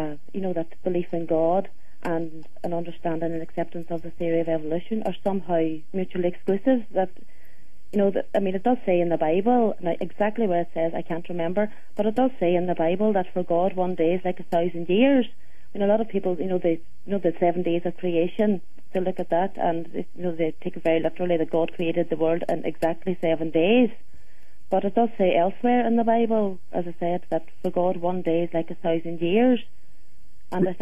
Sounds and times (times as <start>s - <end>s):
Speech: 0.0s - 7.2s, 8.0s - 24.0s, 24.7s - 29.7s, 30.6s - 30.8s.